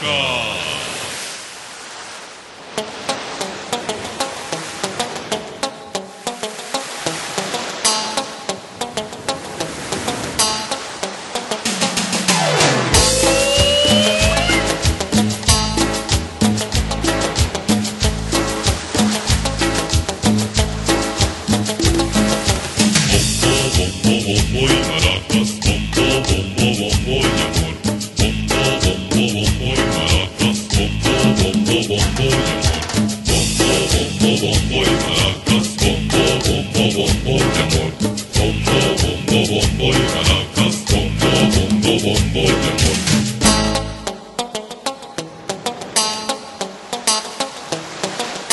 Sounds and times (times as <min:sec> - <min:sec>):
Drum kit: 0:11.7 - 0:24.0, 0:31.4 - 0:34.1.